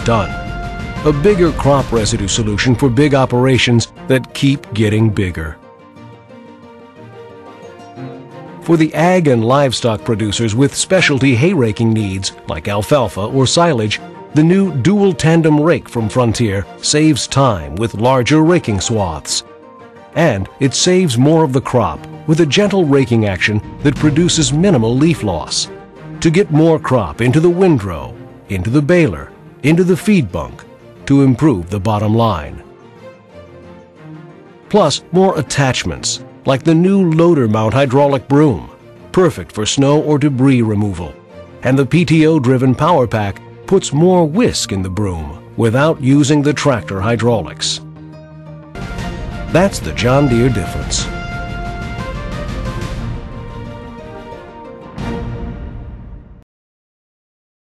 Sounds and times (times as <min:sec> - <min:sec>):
Speech: 0:00.0 - 0:00.4, 0:01.1 - 0:05.6, 0:08.6 - 0:19.4, 0:20.2 - 0:32.6, 0:34.7 - 0:47.8, 0:49.5 - 0:51.1
Music: 0:00.0 - 0:56.5.